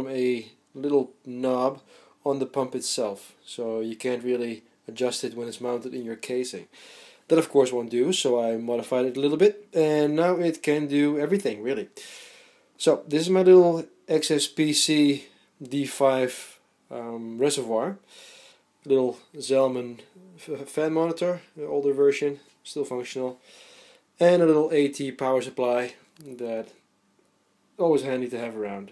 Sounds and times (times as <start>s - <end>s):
Speech: 0.0s - 6.7s, 7.3s - 12.0s, 12.8s - 18.0s, 18.8s - 23.4s, 24.2s - 26.8s, 27.8s - 28.9s.